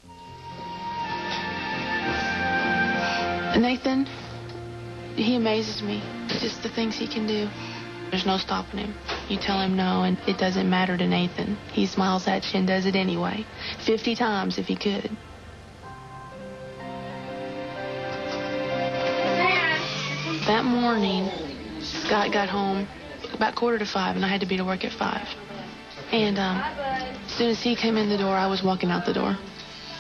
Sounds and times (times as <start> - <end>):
Music: 0.0 - 30.0.